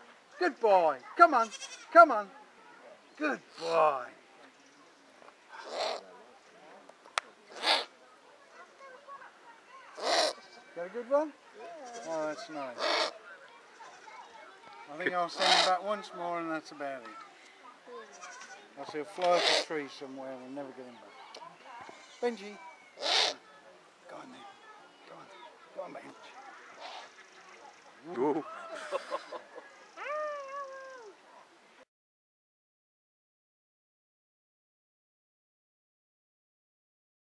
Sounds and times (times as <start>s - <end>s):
Owl: 5.6s - 6.1s, 7.5s - 7.9s, 10.0s - 10.6s, 12.8s - 13.2s, 15.4s - 15.7s, 19.3s - 19.7s, 22.8s - 23.4s, 26.7s - 27.3s.